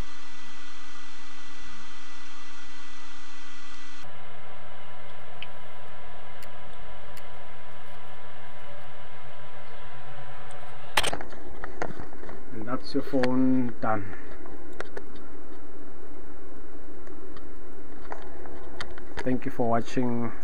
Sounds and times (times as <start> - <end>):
Speech: 12.5 - 14.2, 19.2 - 20.4.